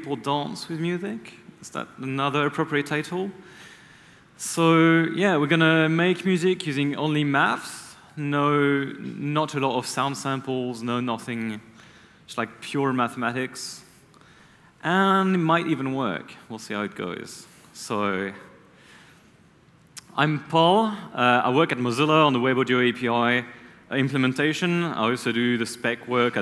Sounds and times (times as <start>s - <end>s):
Speech: 0.0s - 3.4s, 4.4s - 11.7s, 12.3s - 13.9s, 14.8s - 18.5s, 20.0s - 26.4s.